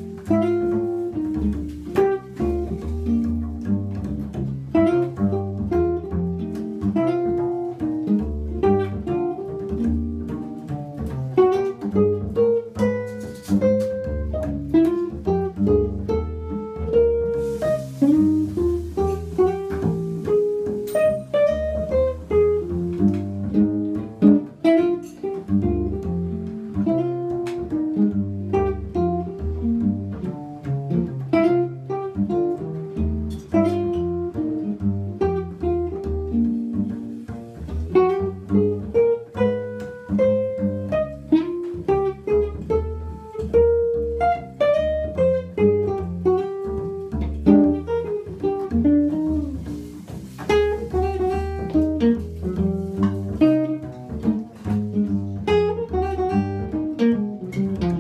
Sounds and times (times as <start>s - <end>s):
Double bass: 0.0s - 58.0s.